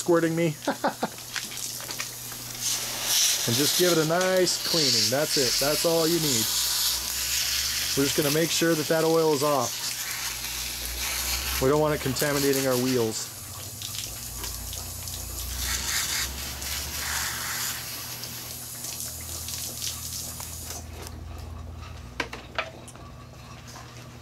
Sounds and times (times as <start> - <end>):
Speech: 0.0 - 0.6, 3.4 - 6.6, 7.9 - 9.8, 11.5 - 13.3.